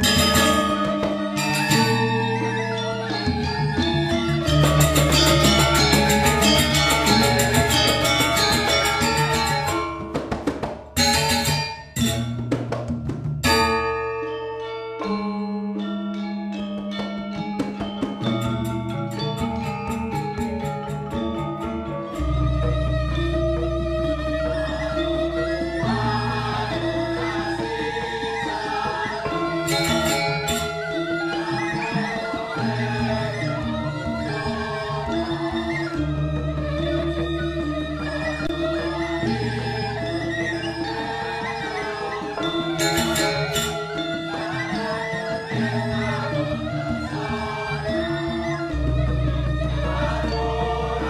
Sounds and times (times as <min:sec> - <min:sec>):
Percussion: 0:00.0 - 0:51.0.